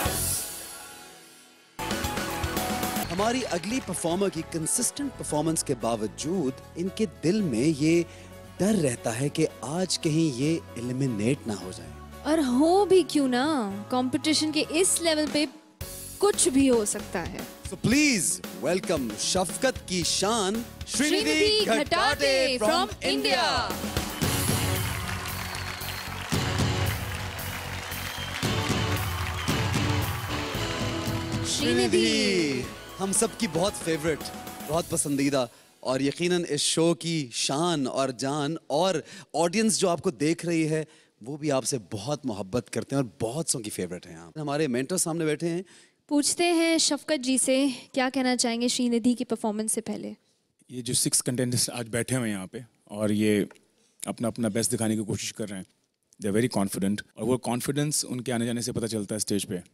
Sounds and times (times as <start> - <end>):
Music: 0.0 - 36.8.